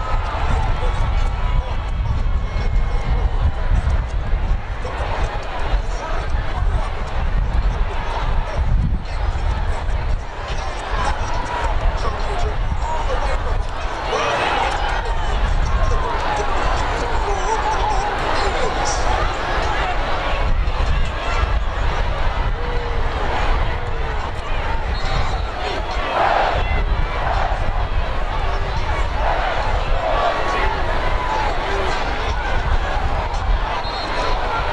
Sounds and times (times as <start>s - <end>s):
Speech: 0.0s - 34.7s.